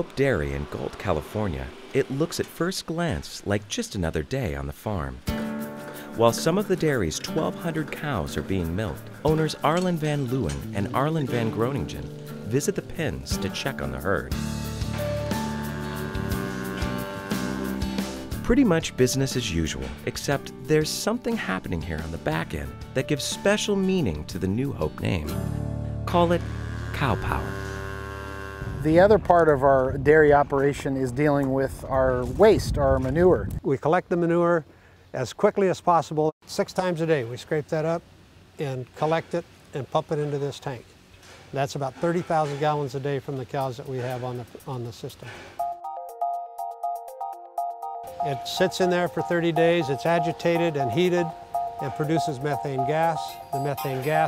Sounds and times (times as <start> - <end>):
Moo: 15.2 - 18.1, 26.3 - 28.9.